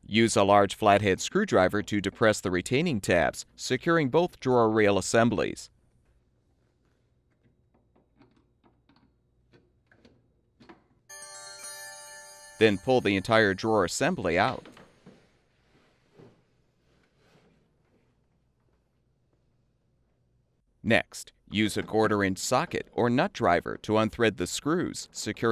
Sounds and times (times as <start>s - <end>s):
Speech: 0.0s - 5.7s, 12.6s - 14.7s, 20.8s - 25.5s
Music: 11.1s - 13.3s.